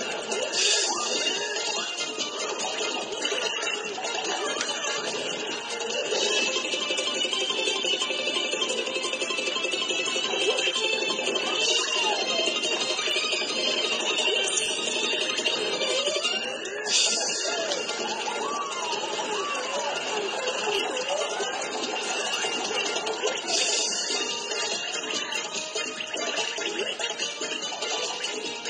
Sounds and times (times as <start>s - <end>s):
Music: 0.0s - 28.6s.